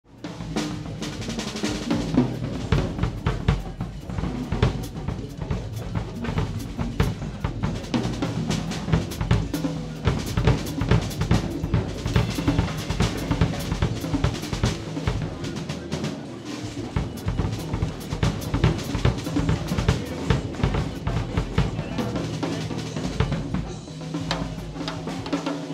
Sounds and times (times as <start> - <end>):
Cymbal: 0.1 - 25.7
Drum kit: 0.1 - 25.7
Bass drum: 0.6 - 15.5, 16.9 - 22.3.